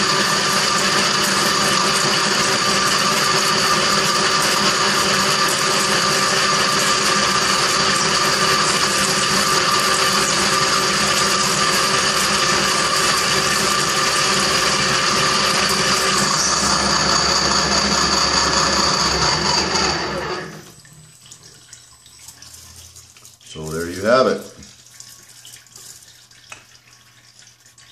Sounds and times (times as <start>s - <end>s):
Power tool: 0.0s - 20.8s.